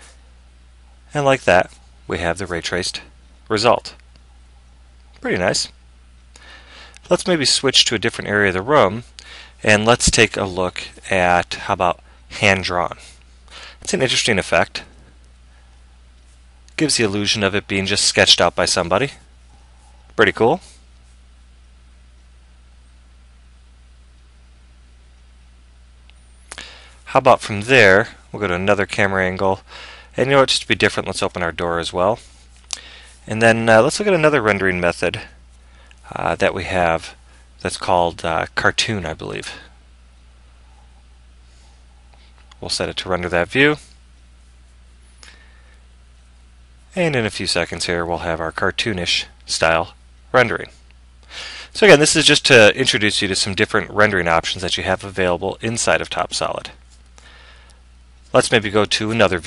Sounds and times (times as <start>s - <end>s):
Speech: 1.1s - 4.0s, 5.2s - 5.8s, 7.0s - 13.0s, 13.8s - 14.9s, 16.8s - 19.2s, 20.2s - 20.7s, 27.1s - 32.2s, 33.3s - 35.4s, 36.1s - 39.7s, 42.6s - 43.9s, 46.9s - 50.8s, 51.8s - 56.8s, 58.3s - 59.4s.